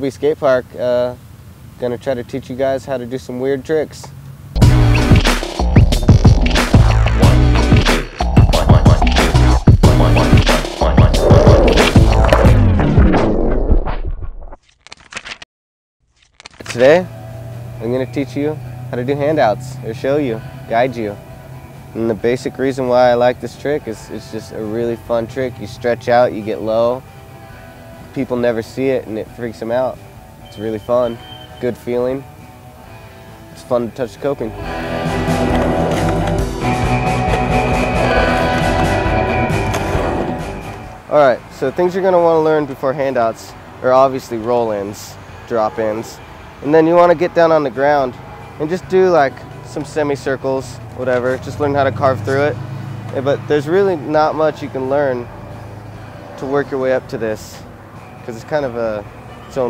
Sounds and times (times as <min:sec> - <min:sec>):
Speech: 0:00.0 - 0:01.2, 0:01.8 - 0:04.1, 0:16.7 - 0:17.1, 0:28.2 - 0:32.2, 0:41.1 - 0:55.3, 0:56.4 - 0:57.6, 0:58.3 - 0:59.6
Outside, urban or manmade: 0:00.0 - 0:59.6
Music: 0:04.6 - 0:14.1, 0:16.7 - 0:59.6.